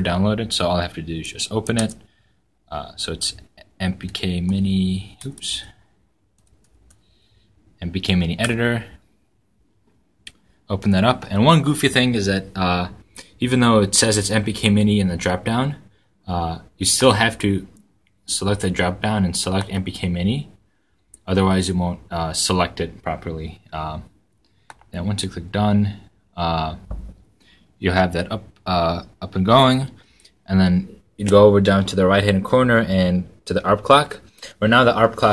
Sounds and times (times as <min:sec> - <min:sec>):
Speech: 0:00.0 - 0:02.1, 0:02.7 - 0:05.8, 0:07.8 - 0:09.0, 0:10.7 - 0:20.6, 0:21.2 - 0:24.1, 0:24.9 - 0:27.0, 0:27.8 - 0:35.3
Inside, small room: 0:00.0 - 0:35.3
Computer keyboard: 0:06.4 - 0:07.0.